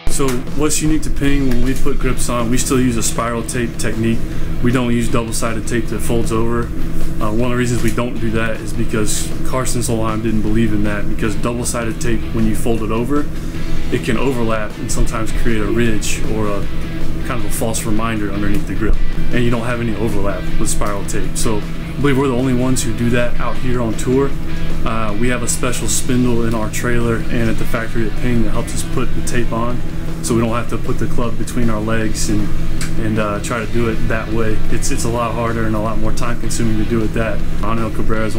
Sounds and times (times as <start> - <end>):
Speech: 0.0 - 13.3, 13.9 - 38.3
Music: 0.0 - 38.3.